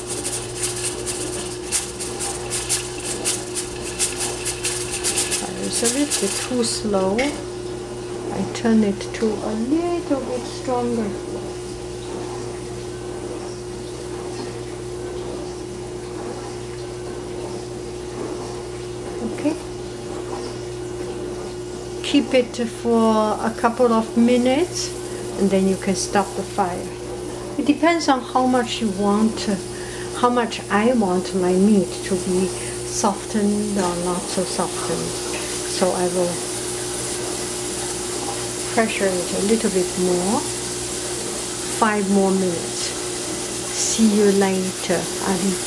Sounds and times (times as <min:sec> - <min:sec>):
Speech: 0:05.5 - 0:07.4, 0:08.3 - 0:11.2, 0:19.2 - 0:19.7, 0:22.0 - 0:27.0, 0:27.6 - 0:36.4, 0:38.7 - 0:40.5, 0:41.8 - 0:43.0, 0:43.7 - 0:45.6.